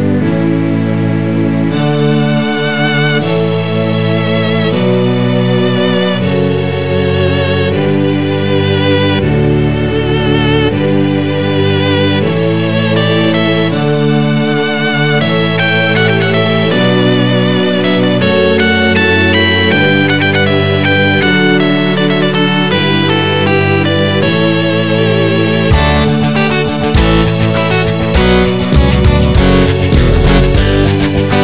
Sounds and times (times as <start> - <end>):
Background music: 0.0 - 31.4.